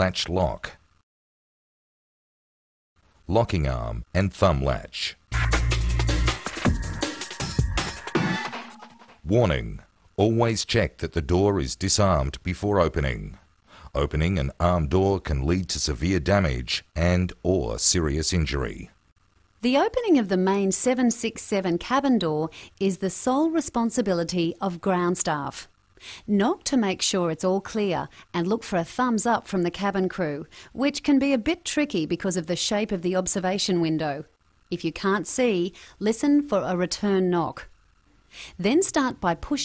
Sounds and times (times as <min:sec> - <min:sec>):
Speech: 0:00.0 - 0:00.8, 0:03.3 - 0:05.2, 0:09.2 - 0:19.0, 0:19.6 - 0:25.7, 0:26.3 - 0:37.7, 0:38.6 - 0:39.6
Music: 0:05.3 - 0:09.2.